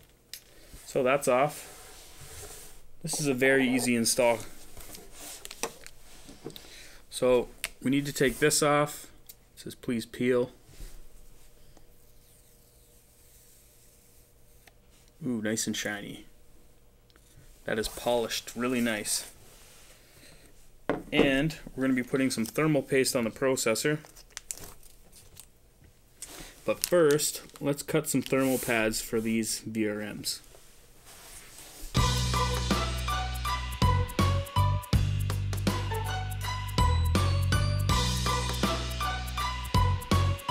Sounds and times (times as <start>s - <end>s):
Inside, small room: 0.0s - 40.5s
Speech: 0.9s - 1.6s, 3.0s - 4.5s, 7.1s - 10.6s, 15.2s - 16.3s, 17.7s - 19.4s, 21.1s - 24.0s, 26.7s - 30.5s.